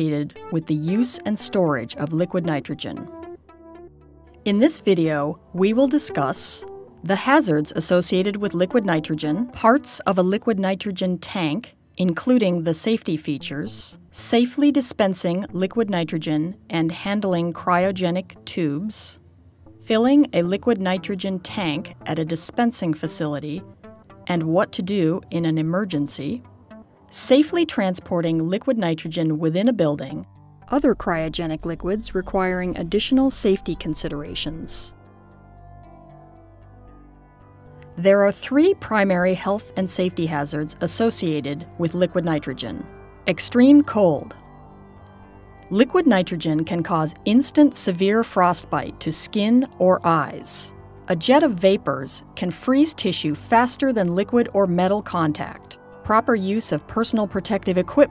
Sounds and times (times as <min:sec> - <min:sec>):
Speech: 0:00.0 - 0:03.1, 0:04.5 - 0:19.2, 0:19.9 - 0:23.6, 0:24.3 - 0:26.4, 0:27.1 - 0:35.0, 0:38.0 - 0:44.4, 0:45.7 - 0:58.1
Music: 0:00.0 - 0:58.1.